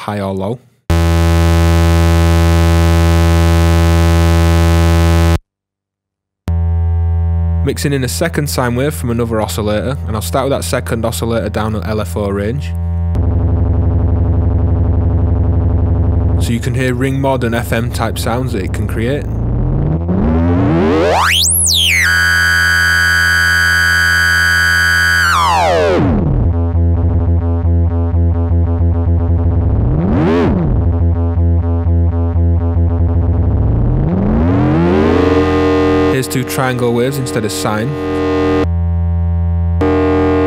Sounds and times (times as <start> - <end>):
Speech: 0.0 - 0.7, 7.6 - 12.8, 16.4 - 19.4, 36.1 - 38.1
Synthesizer: 19.6 - 26.5, 33.7 - 38.7.